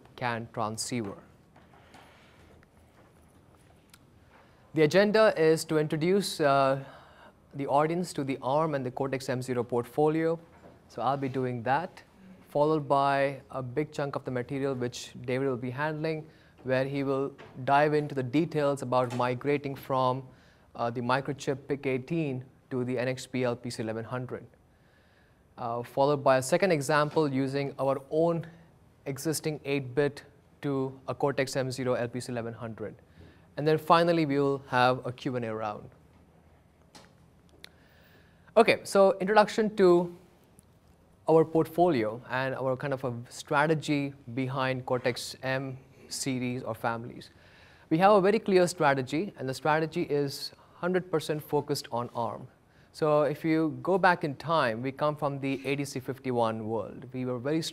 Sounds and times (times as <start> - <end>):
Speech: 0.0 - 1.4, 4.8 - 24.6, 25.6 - 33.0, 33.6 - 36.0, 38.6 - 40.2, 41.2 - 47.3, 47.9 - 57.7.